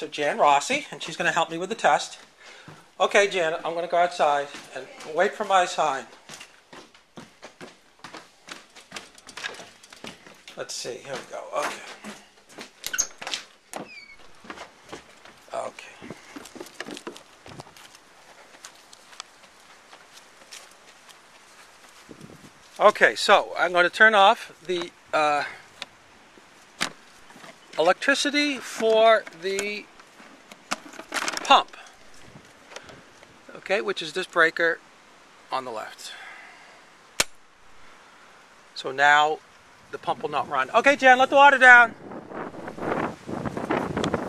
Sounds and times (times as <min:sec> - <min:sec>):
Speech: 0:00.0 - 0:02.2, 0:03.0 - 0:06.1, 0:10.6 - 0:12.0, 0:15.5 - 0:16.0, 0:22.8 - 0:25.6, 0:27.8 - 0:29.9, 0:31.4 - 0:31.9, 0:33.5 - 0:34.8, 0:35.5 - 0:36.2, 0:38.8 - 0:42.0.